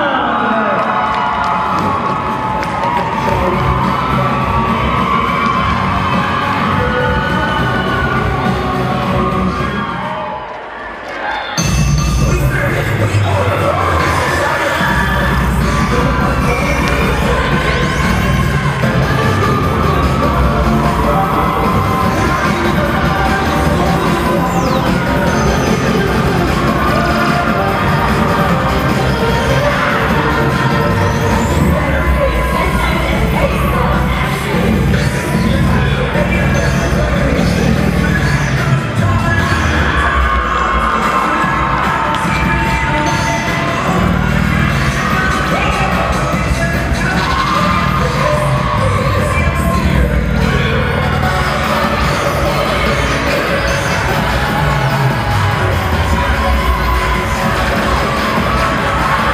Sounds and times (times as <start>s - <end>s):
Music: 0.0s - 11.0s, 11.6s - 59.3s
Cheering: 0.0s - 59.3s
Inside, public space: 0.0s - 59.3s.